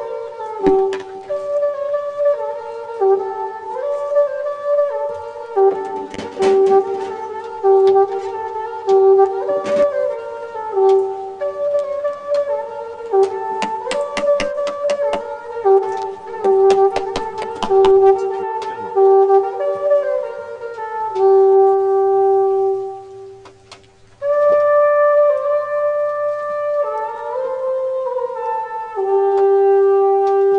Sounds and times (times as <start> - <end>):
Trumpet: 0.0 - 30.5
Wind instrument, woodwind instrument: 0.0 - 30.5.